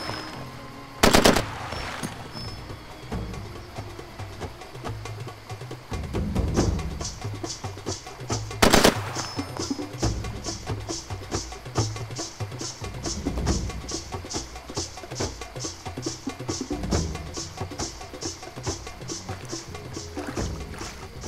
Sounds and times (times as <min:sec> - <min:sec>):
Music: 0:00.0 - 0:21.2.